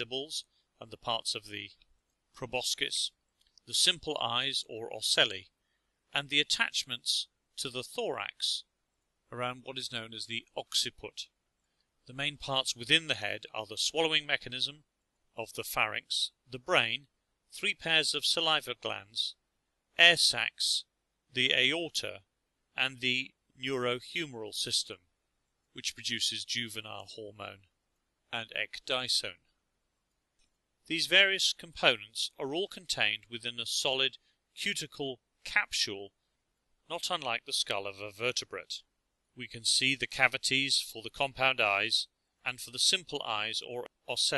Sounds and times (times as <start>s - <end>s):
Speech: 0.0s - 1.8s, 2.4s - 5.5s, 6.1s - 8.7s, 9.3s - 11.4s, 12.1s - 14.8s, 15.4s - 19.4s, 20.0s - 25.0s, 25.8s - 27.7s, 28.3s - 29.5s, 30.9s - 36.1s, 36.9s - 44.3s.